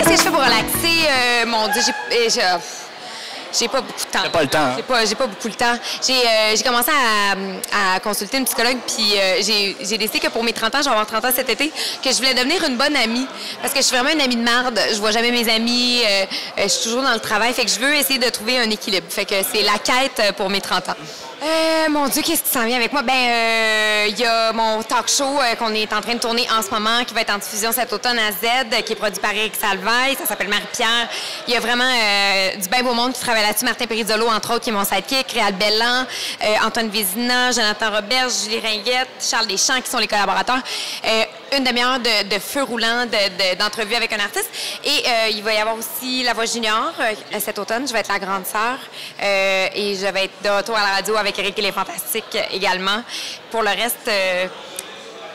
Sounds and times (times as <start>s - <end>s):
Speech: 0.0s - 2.8s, 3.5s - 55.3s.